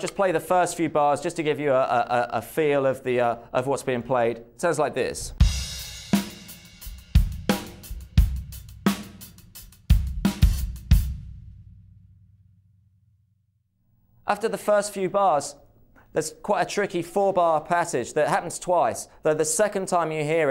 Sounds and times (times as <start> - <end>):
Drum kit: 5.2 - 11.8
Bass drum: 5.3 - 12.0.